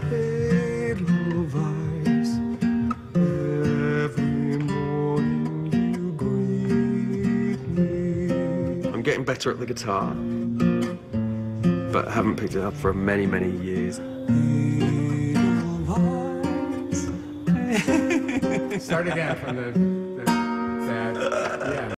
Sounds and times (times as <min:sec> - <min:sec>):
Music: 0:00.0 - 0:21.9
Speech: 0:09.0 - 0:10.2, 0:11.9 - 0:14.0, 0:18.8 - 0:19.8.